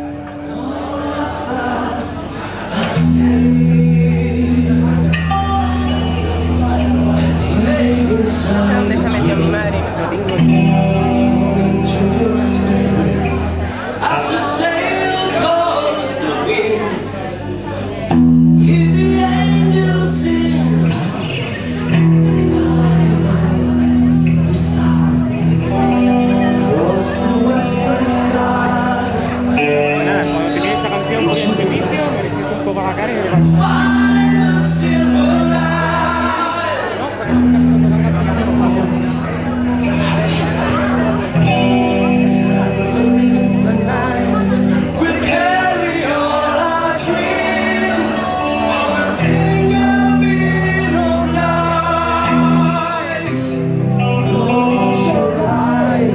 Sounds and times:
Music: 0:00.0 - 0:17.0, 0:18.0 - 0:56.1
Speech: 0:00.0 - 0:56.1.

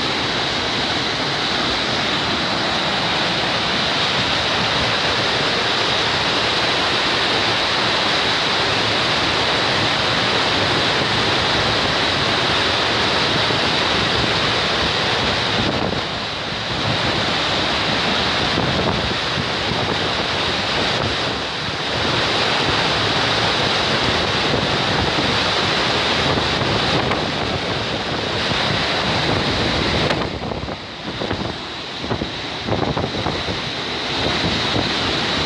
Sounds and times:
Waterfall: 0:00.0 - 0:35.4.

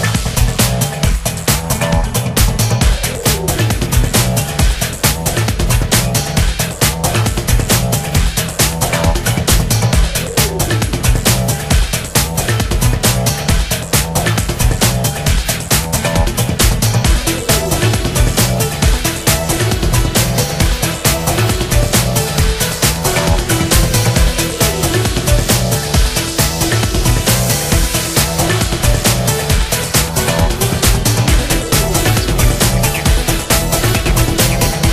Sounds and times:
Music: 0:00.0 - 0:34.9.

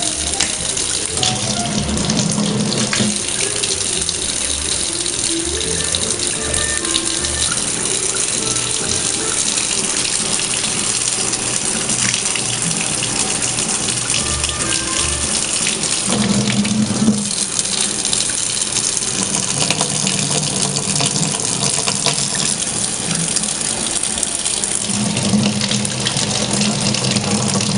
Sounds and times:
Sink (filling or washing): 0:00.0 - 0:27.7
Water: 0:00.0 - 0:27.7
Water tap, faucet: 0:00.0 - 0:27.7.

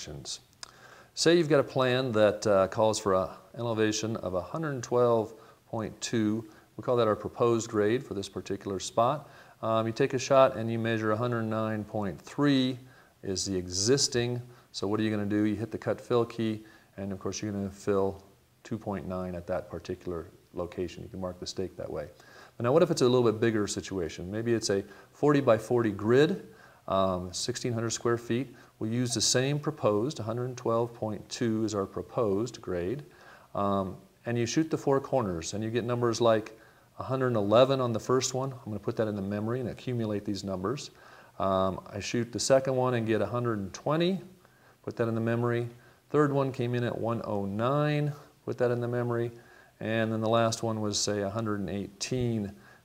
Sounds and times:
Speech: 0:00.0 - 0:00.5, 0:01.2 - 0:52.6.

